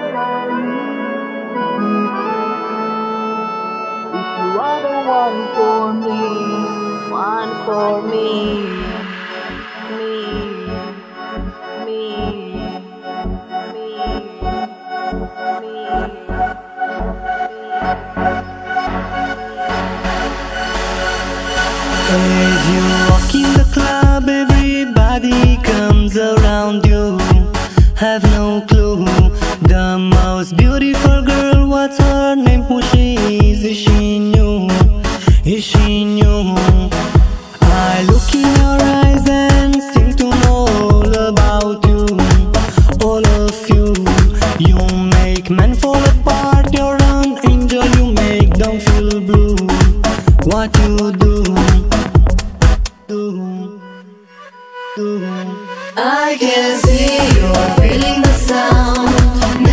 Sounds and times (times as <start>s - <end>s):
Music: 0.0s - 59.7s.